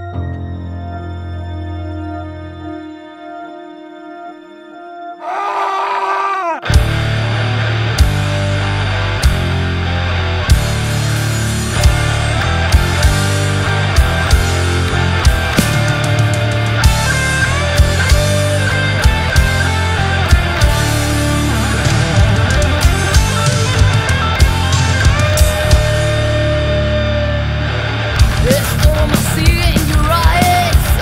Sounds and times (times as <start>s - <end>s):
Music: 0.0s - 5.3s, 6.6s - 31.0s.